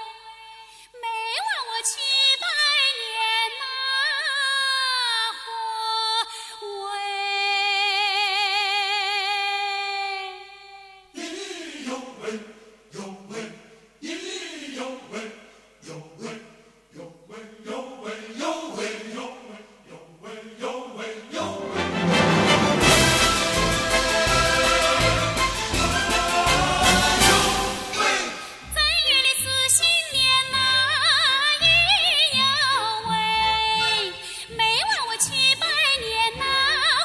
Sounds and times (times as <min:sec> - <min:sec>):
Music: 0:21.4 - 0:37.0.